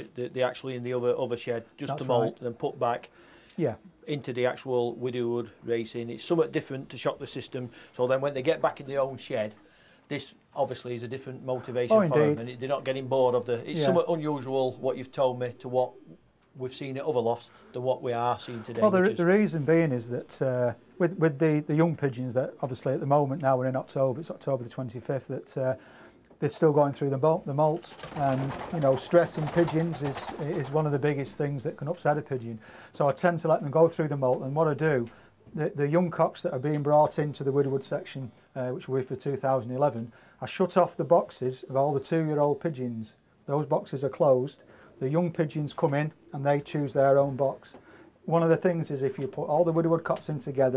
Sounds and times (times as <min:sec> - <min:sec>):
Speech: 0:00.0 - 0:25.8, 0:26.4 - 0:50.7
Inside, small room: 0:00.0 - 0:50.7.